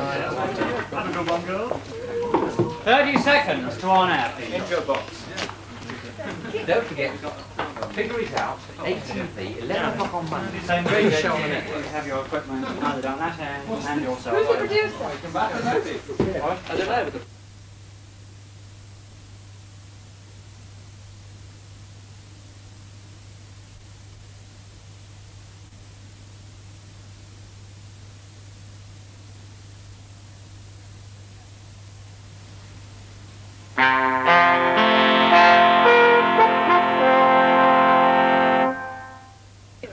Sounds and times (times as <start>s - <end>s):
Music: 33.8s - 39.4s.